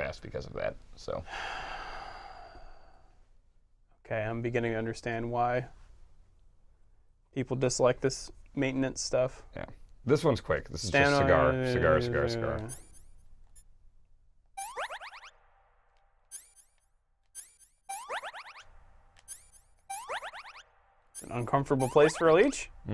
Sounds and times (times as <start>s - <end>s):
Speech: 7.4s - 12.7s.